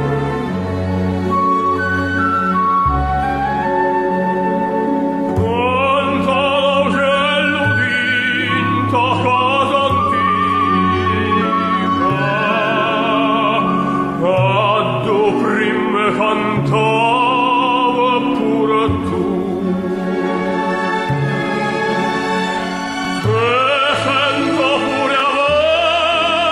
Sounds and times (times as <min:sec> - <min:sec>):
Opera: 0:00.0 - 0:26.5.